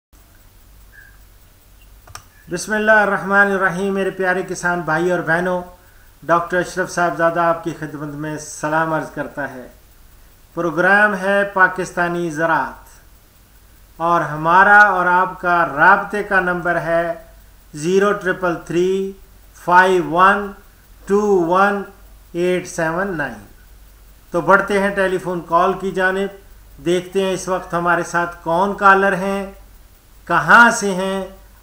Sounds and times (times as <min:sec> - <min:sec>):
Clicking: 0:01.8 - 0:02.4
Speech: 0:02.5 - 0:09.8, 0:10.6 - 0:13.0, 0:14.0 - 0:23.5, 0:24.3 - 0:29.6, 0:30.3 - 0:31.4.